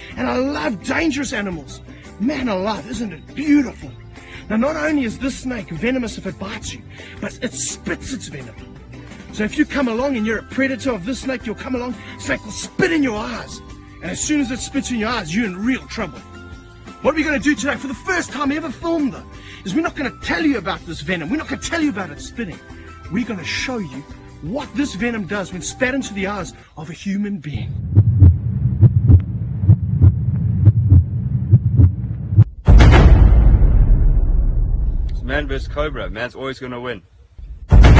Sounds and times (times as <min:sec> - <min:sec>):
Music: 0:00.0 - 0:27.2
Speech: 0:17.1 - 0:27.8, 0:35.2 - 0:37.0.